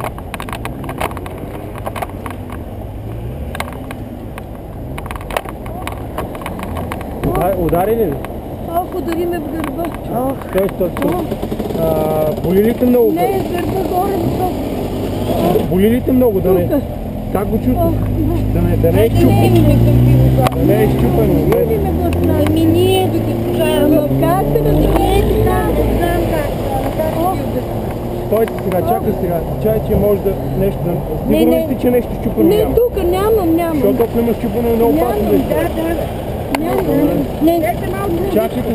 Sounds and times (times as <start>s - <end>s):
Speech: 17.7s - 27.6s.